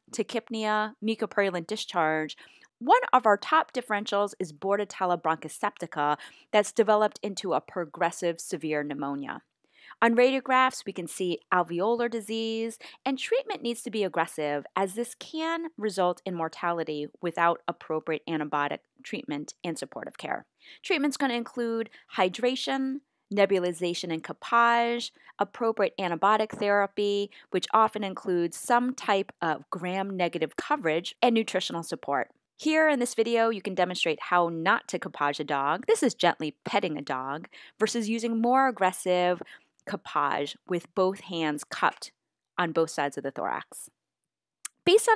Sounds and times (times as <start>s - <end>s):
Speech: 0.1s - 9.4s, 10.0s - 43.9s, 44.7s - 45.1s.